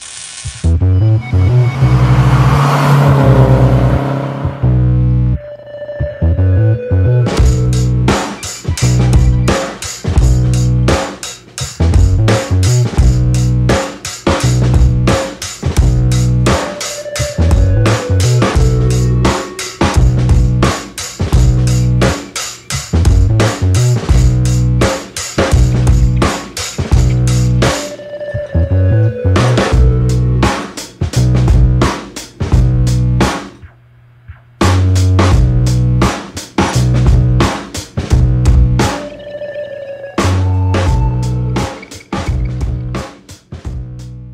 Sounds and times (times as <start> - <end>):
Music: 0.0 - 3.8, 4.6 - 44.3.